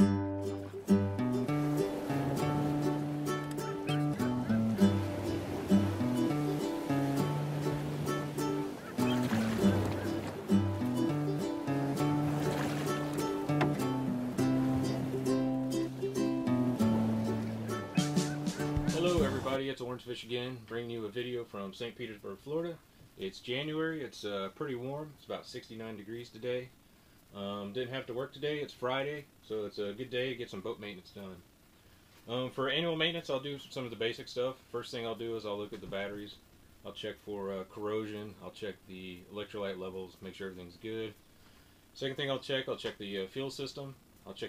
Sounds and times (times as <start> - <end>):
Speech: 18.9 - 26.7, 27.3 - 31.4, 32.3 - 41.2, 42.0 - 44.4.